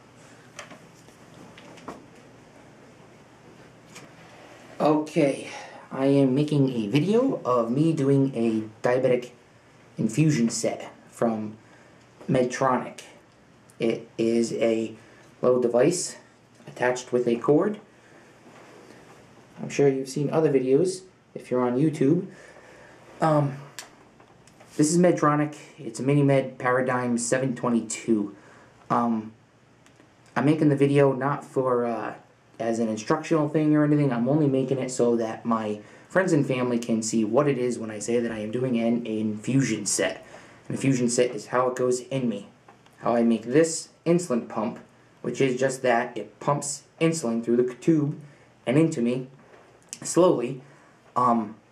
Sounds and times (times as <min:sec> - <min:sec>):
Speech: 0:04.8 - 0:09.4, 0:10.0 - 0:11.6, 0:12.2 - 0:13.2, 0:13.8 - 0:17.9, 0:19.6 - 0:22.4, 0:23.2 - 0:23.9, 0:24.7 - 0:29.4, 0:30.3 - 0:51.7.